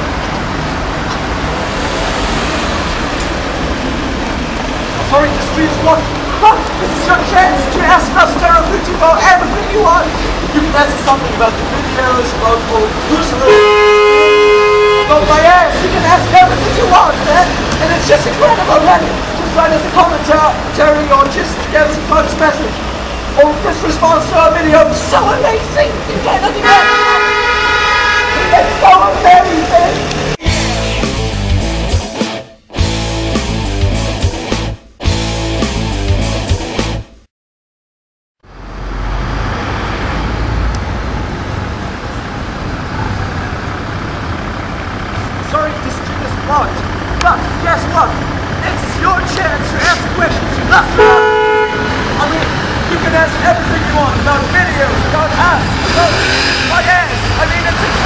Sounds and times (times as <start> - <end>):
Car: 0.0 - 31.0, 38.4 - 58.0.